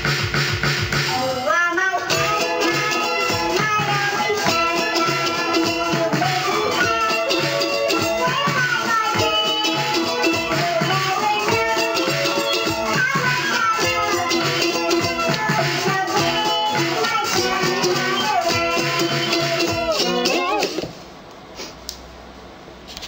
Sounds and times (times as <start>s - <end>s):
Music: 0.0s - 20.9s
Synthetic singing: 1.1s - 20.8s.